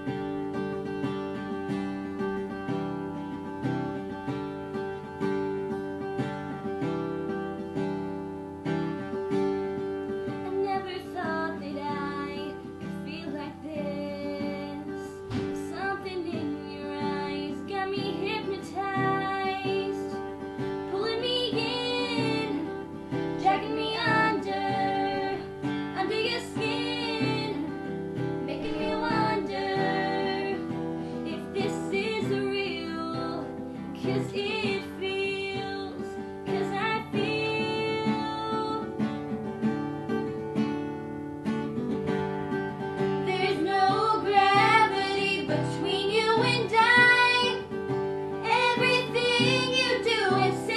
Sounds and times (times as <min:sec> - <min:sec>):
Music: 0:00.0 - 0:50.7
Female singing: 0:10.3 - 0:20.3, 0:20.9 - 0:39.1, 0:43.2 - 0:47.8, 0:48.4 - 0:50.7.